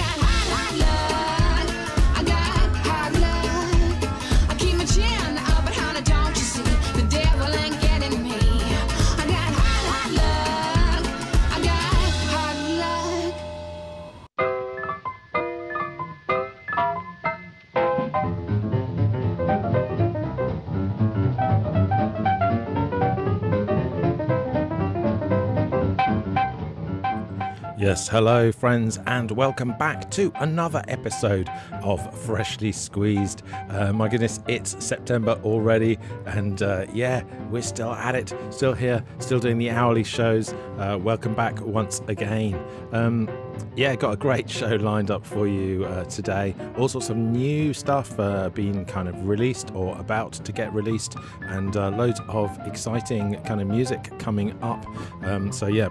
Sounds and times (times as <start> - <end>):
Electronic music: 0.0 - 18.7
Swing music: 0.0 - 55.9.